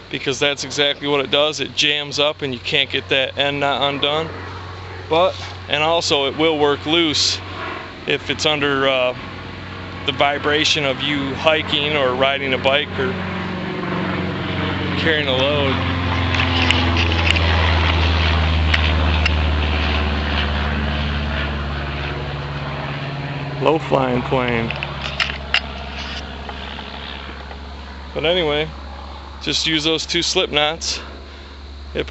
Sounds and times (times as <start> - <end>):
Outside, rural or natural: 0.0 - 32.1
Vehicle: 0.0 - 32.1
Speech: 0.1 - 4.3, 5.1 - 7.4, 8.1 - 9.2, 10.1 - 13.2, 15.0 - 15.8, 23.6 - 24.8, 28.2 - 28.7, 29.4 - 31.1.